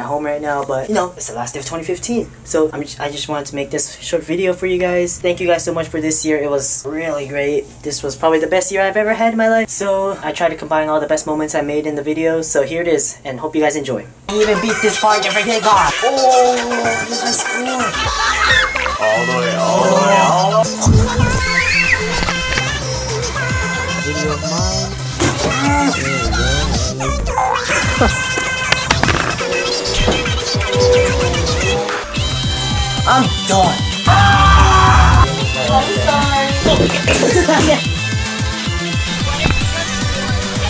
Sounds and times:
Speech: 0.0 - 18.0, 19.0 - 20.8
Music: 14.3 - 40.7.

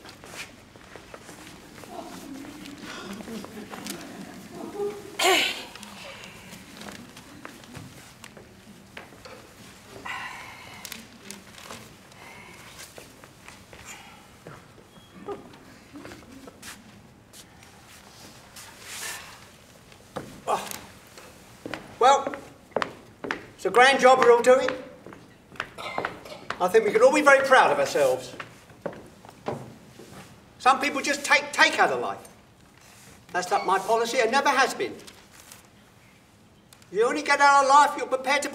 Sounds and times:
Inside, large room or hall: 0.0 - 38.5
Speech: 26.6 - 28.4, 30.6 - 32.3, 33.3 - 35.1, 36.9 - 38.5.

